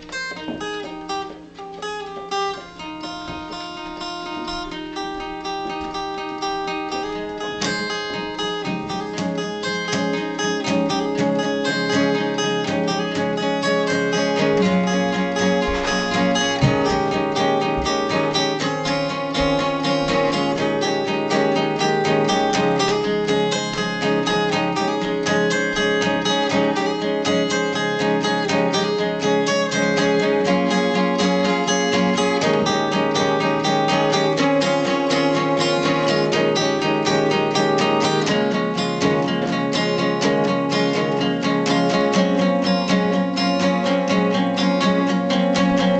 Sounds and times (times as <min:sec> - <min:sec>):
Acoustic guitar: 0:00.0 - 0:45.9
Strum: 0:00.0 - 0:45.9.